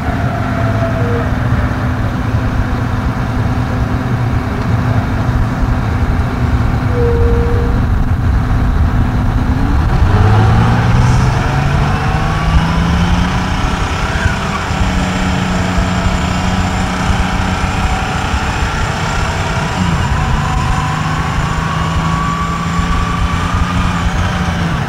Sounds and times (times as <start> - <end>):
Bus: 0.0 - 24.8
Outside, urban or manmade: 0.0 - 24.8.